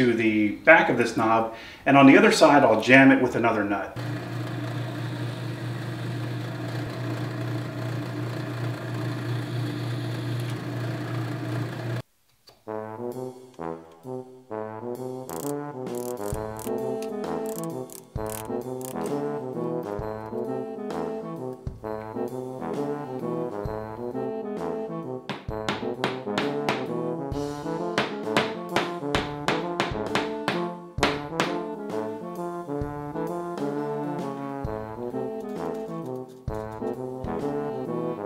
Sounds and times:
Music: 12.5s - 38.2s.

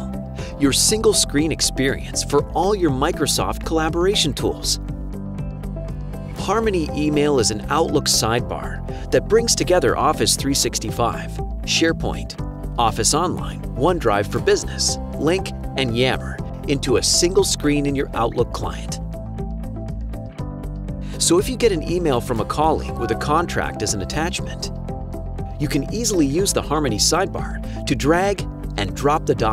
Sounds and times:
Music: 0.0s - 29.5s
Speech: 0.6s - 4.8s, 6.4s - 19.0s, 21.2s - 24.7s, 25.6s - 29.5s.

